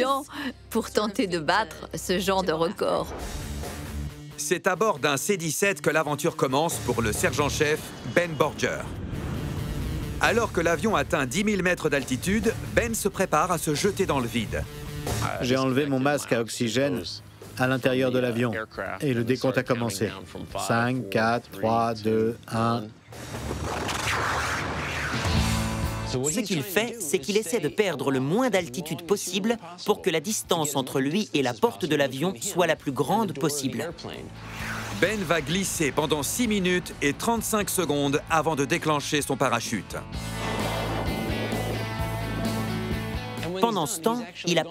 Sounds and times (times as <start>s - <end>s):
Music: 0.0s - 44.7s
Speech: 4.4s - 8.9s, 10.2s - 14.6s, 15.2s - 23.0s, 26.1s - 34.3s, 35.0s - 40.1s, 43.4s - 44.7s.